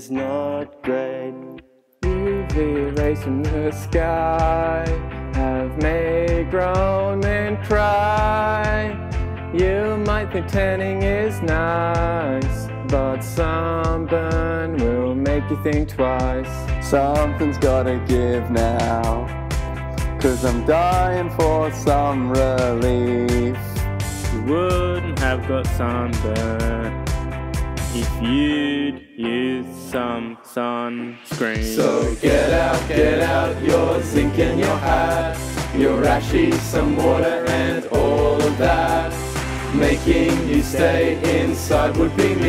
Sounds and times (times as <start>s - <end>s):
Happy music: 0.0s - 42.4s.